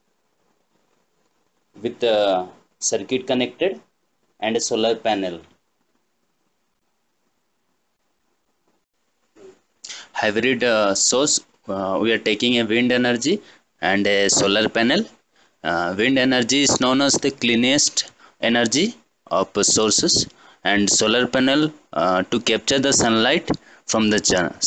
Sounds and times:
Speech: 0:01.8 - 0:05.6, 0:09.9 - 0:24.6.

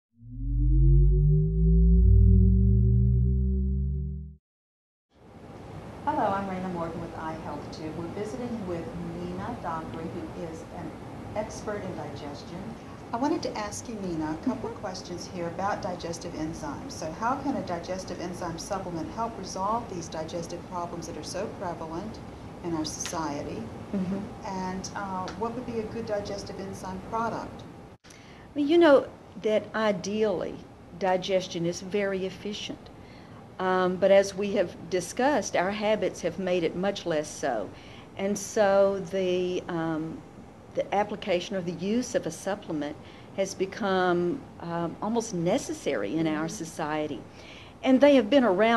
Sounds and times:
Speech: 0:06.1 - 0:27.6, 0:28.6 - 0:32.9, 0:33.6 - 0:40.2, 0:40.8 - 0:47.2, 0:47.8 - 0:48.7.

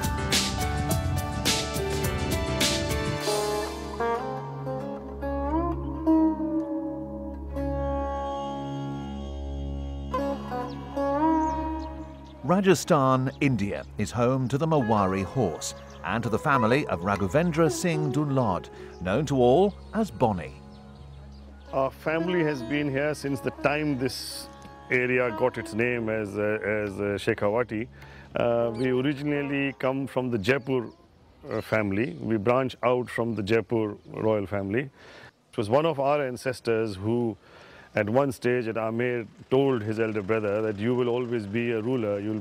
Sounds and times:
Music: 0:00.0 - 0:31.6
Speech: 0:12.4 - 0:20.6, 0:21.7 - 0:34.9, 0:35.6 - 0:37.4, 0:38.0 - 0:42.4.

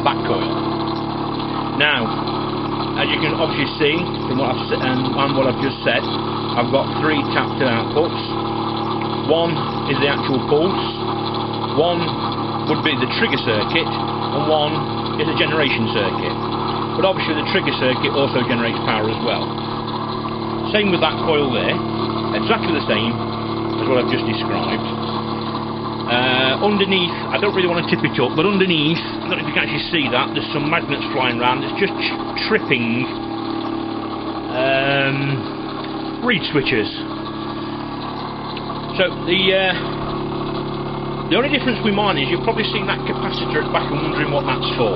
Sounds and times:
Speech: 0:00.0 - 0:00.6, 0:01.8 - 0:02.2, 0:03.0 - 0:08.4, 0:09.2 - 0:11.0, 0:11.7 - 0:19.5, 0:20.7 - 0:23.2, 0:23.8 - 0:25.0, 0:26.1 - 0:33.2, 0:34.5 - 0:35.5, 0:36.2 - 0:37.1, 0:38.9 - 0:40.0, 0:41.3 - 0:44.9.

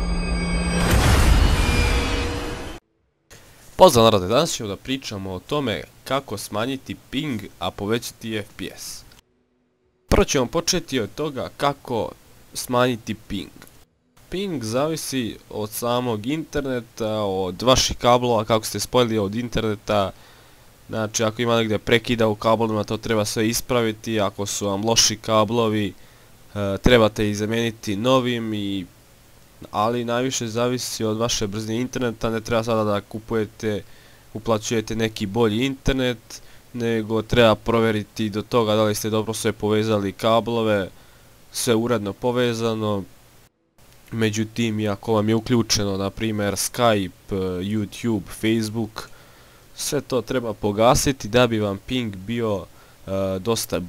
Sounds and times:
Speech: 0:03.8 - 0:09.1, 0:10.1 - 0:13.7, 0:14.3 - 0:20.2, 0:20.9 - 0:28.9, 0:29.6 - 0:43.1, 0:44.1 - 0:49.1, 0:49.8 - 0:53.8.

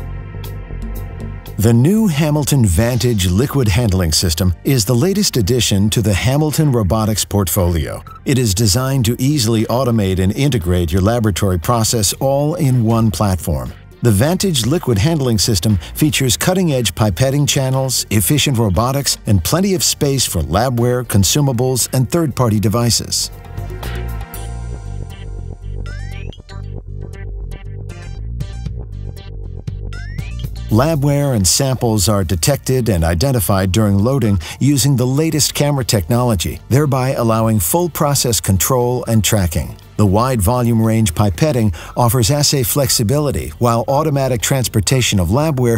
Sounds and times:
Music: 0:00.0 - 0:45.7
Speech: 0:01.6 - 0:23.3, 0:30.7 - 0:45.7.

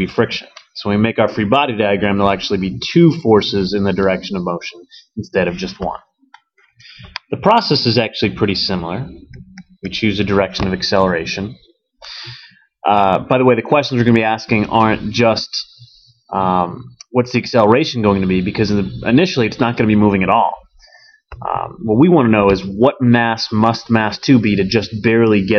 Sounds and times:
Speech: 0:00.0 - 0:06.1, 0:07.2 - 0:11.6, 0:12.8 - 0:20.7, 0:21.4 - 0:25.5.

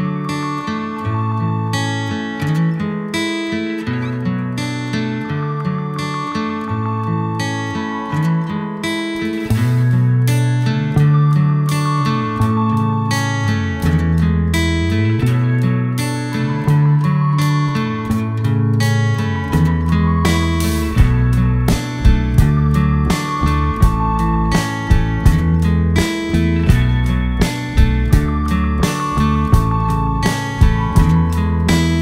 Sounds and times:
Music: 0:00.0 - 0:32.0.

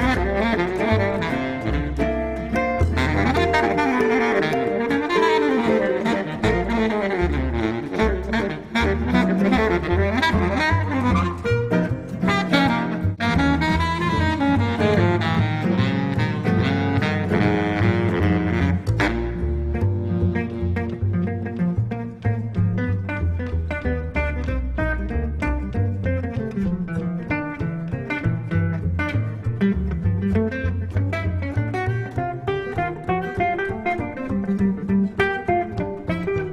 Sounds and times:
Blues: 0:00.0 - 0:36.5
Double bass: 0:00.0 - 0:36.5
Jazz: 0:00.0 - 0:36.5
Saxophone: 0:00.0 - 0:36.5.

